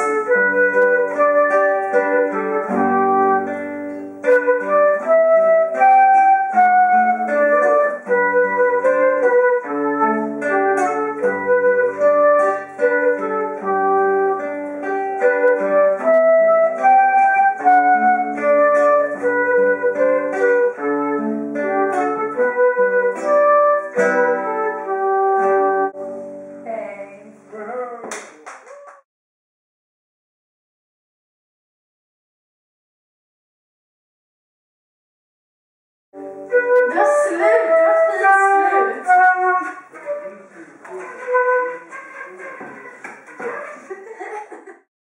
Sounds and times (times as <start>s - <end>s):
Flute: 0.0s - 26.0s, 36.2s - 43.9s
Speech: 26.6s - 28.4s, 36.9s - 39.4s.